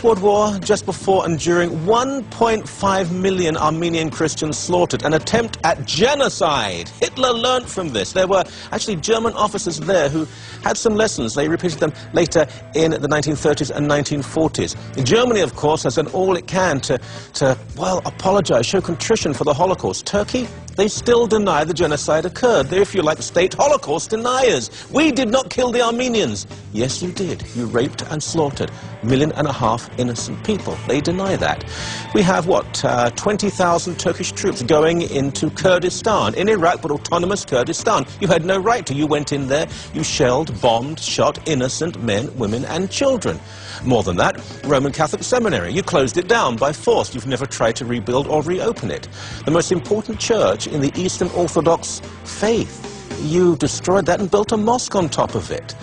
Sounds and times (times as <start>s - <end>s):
Music: 0.0s - 55.8s
Speech: 0.0s - 55.8s.